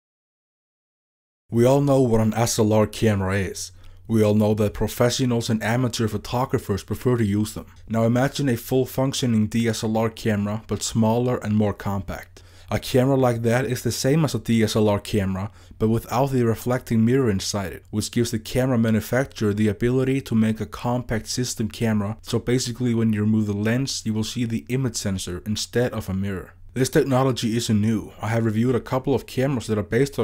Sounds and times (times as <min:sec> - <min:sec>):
Speech: 0:01.5 - 0:30.2.